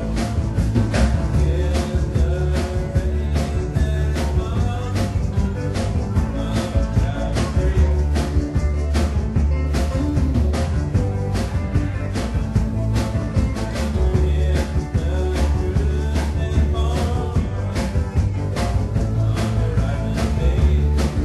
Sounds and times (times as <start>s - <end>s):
Music: 0.0s - 21.2s.